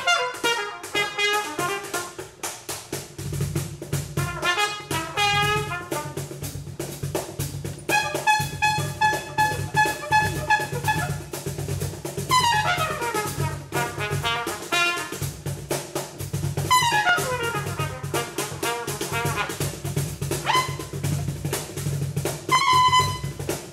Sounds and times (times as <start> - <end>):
Trumpet: 0.0 - 2.6, 4.0 - 6.6, 7.8 - 15.5, 16.6 - 21.7, 22.3 - 23.7.